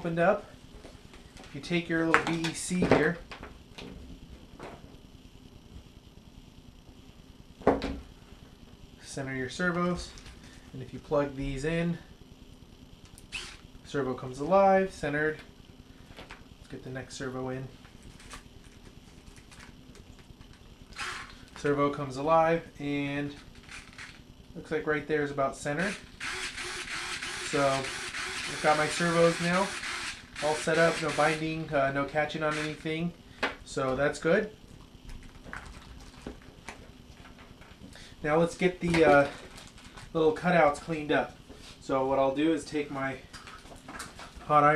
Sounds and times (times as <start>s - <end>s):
Speech: 0.0s - 0.5s, 1.5s - 3.2s, 9.0s - 10.2s, 10.8s - 12.1s, 13.9s - 15.4s, 16.7s - 17.7s, 21.6s - 23.4s, 24.6s - 26.0s, 27.5s - 27.9s, 28.5s - 29.7s, 30.4s - 34.6s, 38.2s - 39.4s, 40.1s - 43.2s, 44.4s - 44.7s.